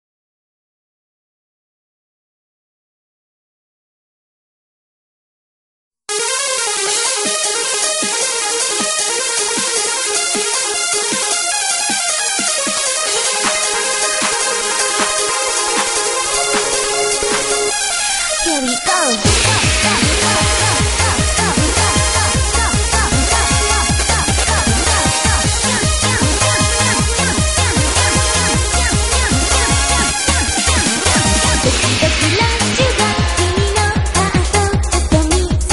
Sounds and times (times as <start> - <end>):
Pop music: 6.1 - 35.7.